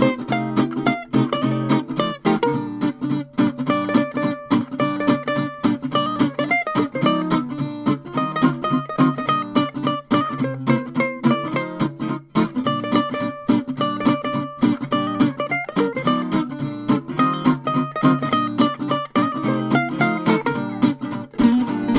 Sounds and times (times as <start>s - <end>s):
Music: 0.0s - 21.9s.